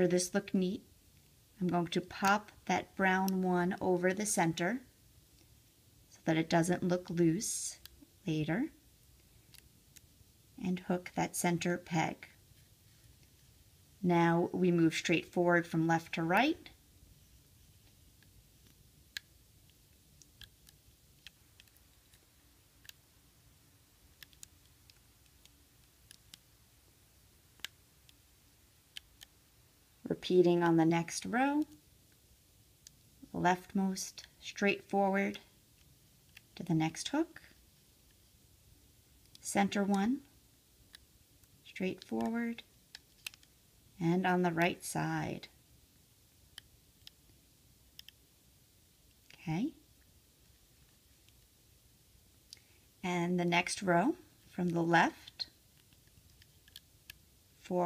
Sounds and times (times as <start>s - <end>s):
Speech: 0.0s - 0.8s, 1.6s - 4.9s, 6.1s - 8.8s, 10.6s - 12.4s, 14.0s - 16.8s, 30.0s - 31.8s, 33.2s - 35.5s, 36.6s - 37.5s, 39.4s - 40.3s, 41.7s - 42.7s, 44.0s - 45.6s, 49.3s - 49.8s, 53.0s - 55.5s, 57.6s - 57.8s.